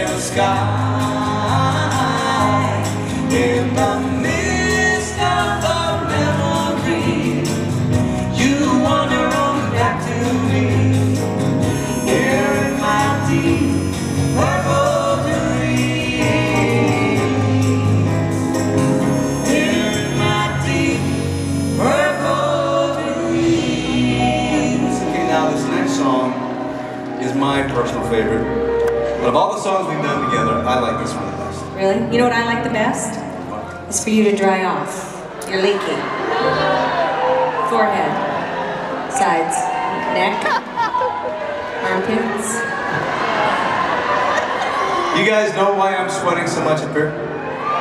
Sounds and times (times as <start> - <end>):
Music: 0.0 - 47.8.